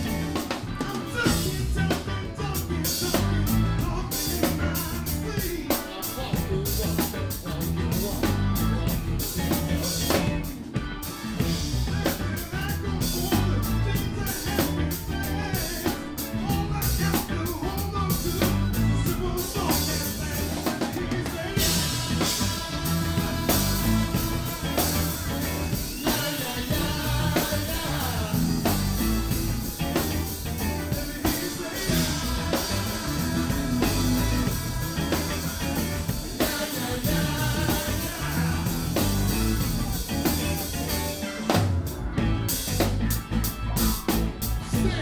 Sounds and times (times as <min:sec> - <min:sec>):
Bass drum: 0:00.0 - 0:05.6, 0:06.3 - 0:10.6, 0:11.4 - 0:41.1, 0:41.7 - 0:45.0
Drum kit: 0:00.0 - 0:45.0.